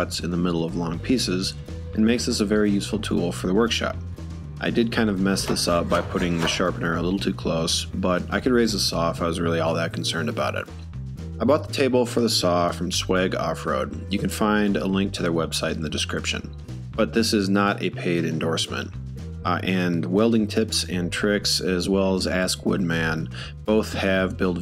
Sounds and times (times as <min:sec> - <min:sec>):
Speech: 0:00.0 - 0:04.0, 0:04.6 - 0:10.7, 0:11.4 - 0:24.6
Music: 0:00.0 - 0:24.6.